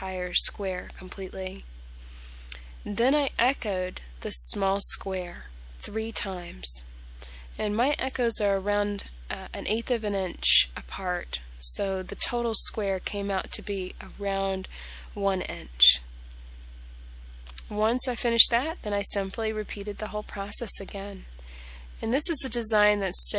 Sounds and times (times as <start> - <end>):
Speech: 0.0 - 1.6, 2.9 - 6.8, 7.6 - 16.0, 17.5 - 21.3, 22.0 - 23.3.